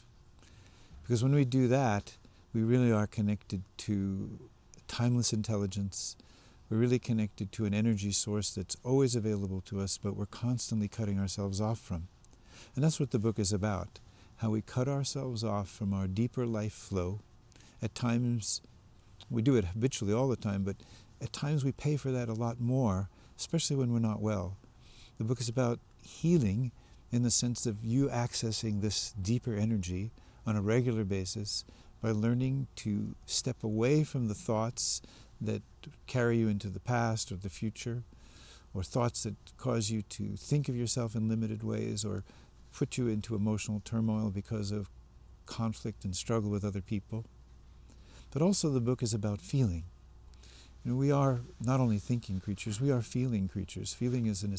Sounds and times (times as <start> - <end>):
Speech: 1.0 - 12.1, 12.8 - 17.2, 17.8 - 24.6, 25.2 - 38.1, 38.8 - 44.9, 45.5 - 47.3, 48.3 - 49.9, 50.8 - 54.5.